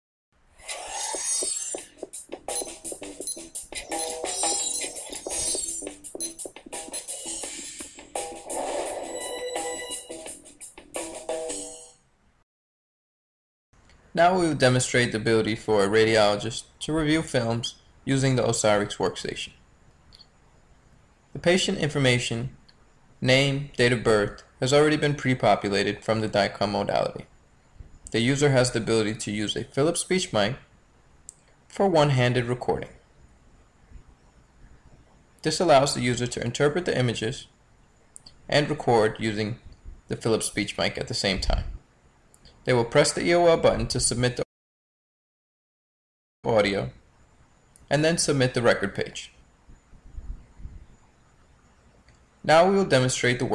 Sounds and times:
Music: 1.4 - 12.0
Narration, monologue: 13.8 - 33.2, 34.4 - 44.5, 46.5 - 49.7, 52.0 - 53.5
Male speech, man speaking: 14.2 - 19.6, 21.4 - 22.6, 23.2 - 27.3, 28.1 - 30.6, 31.7 - 33.0, 35.5 - 37.5, 38.5 - 41.8, 42.7 - 44.5, 46.5 - 47.0, 47.9 - 49.4, 52.5 - 53.5.

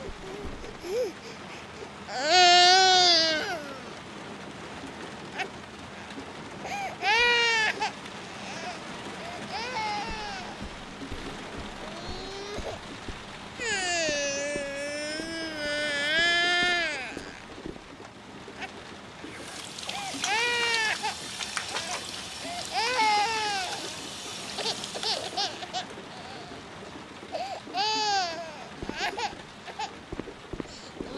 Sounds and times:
Splash, splatter: 19.3 - 25.8.

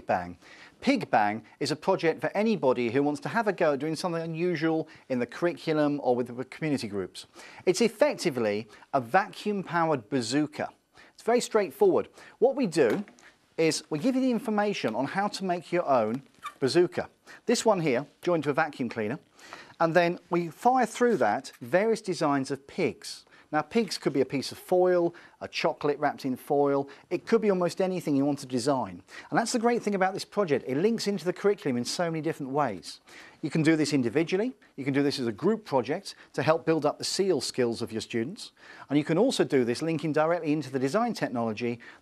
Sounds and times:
Speech: 0.0 - 41.8.

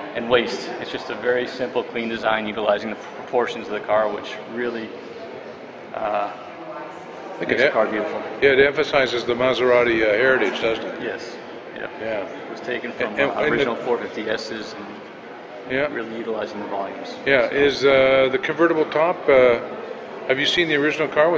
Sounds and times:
Speech: 0.0 - 4.9, 6.0 - 6.5, 7.4 - 15.0, 15.7 - 19.7, 20.3 - 21.3.

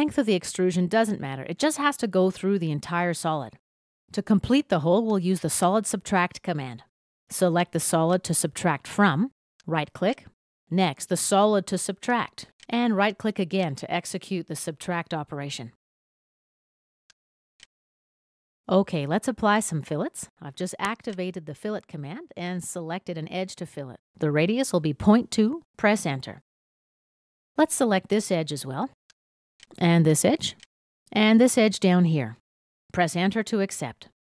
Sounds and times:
Speech: 0.0 - 15.8, 18.7 - 26.4, 27.6 - 29.0, 29.8 - 34.2.

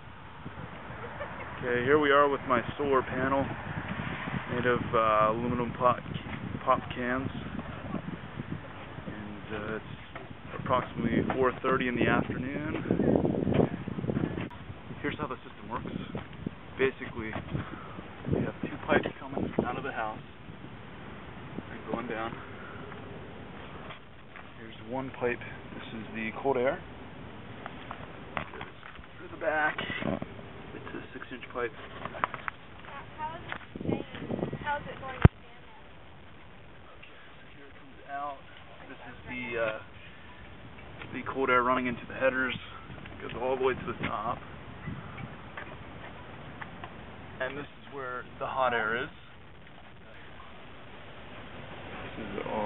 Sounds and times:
Outside, urban or manmade: 0.0 - 52.6.

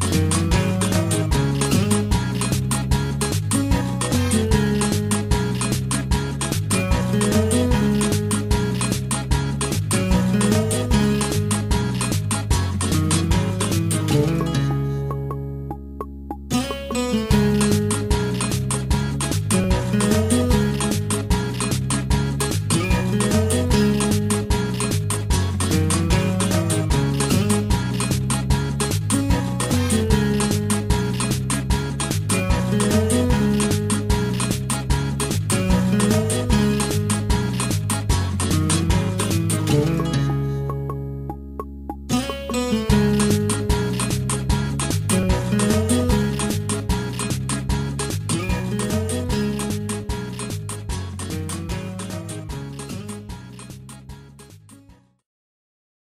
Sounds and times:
Music: 0.0 - 55.2.

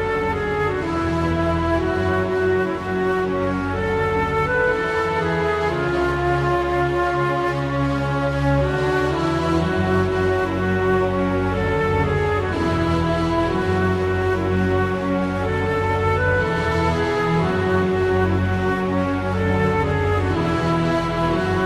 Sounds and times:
Music: 0.0 - 21.6.

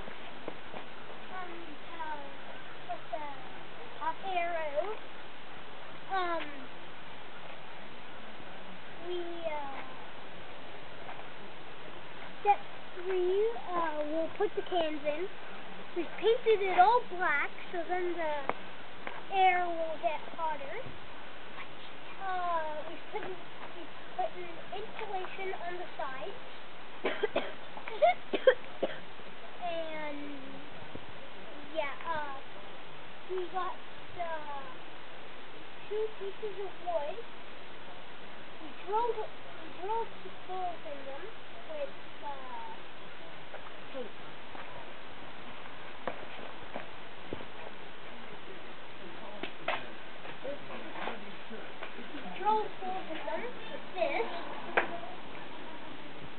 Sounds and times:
Speech: 1.3 - 5.0, 6.1 - 6.7, 9.0 - 10.0, 12.4 - 15.3, 16.0 - 18.6, 19.3 - 20.9, 22.2 - 26.4, 29.6 - 30.7, 31.4 - 32.6, 33.3 - 34.8, 35.9 - 37.2, 38.6 - 42.8, 48.2 - 56.0.

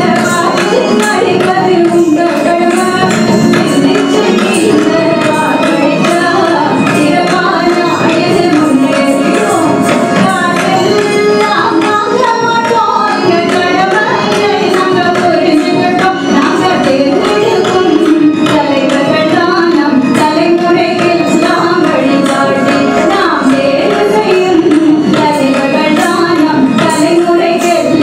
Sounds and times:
Carnatic music: 0.0 - 28.0.

